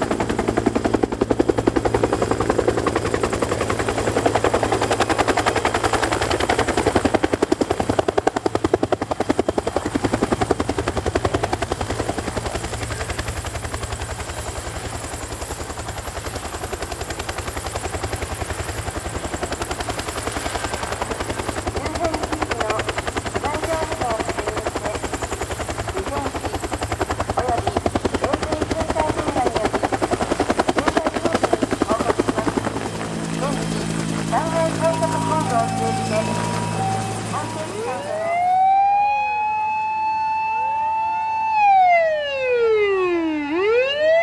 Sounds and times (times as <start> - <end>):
Speech: 21.8 - 25.2, 26.0 - 26.6, 27.4 - 29.8, 30.7 - 32.6, 33.4 - 36.5, 37.3 - 38.2.